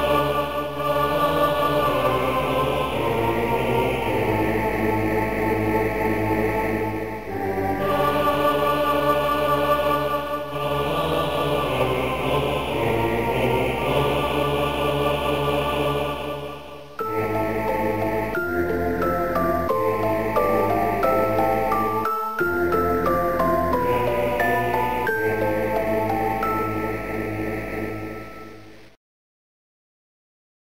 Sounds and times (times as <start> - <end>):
Music: 0.0 - 29.0.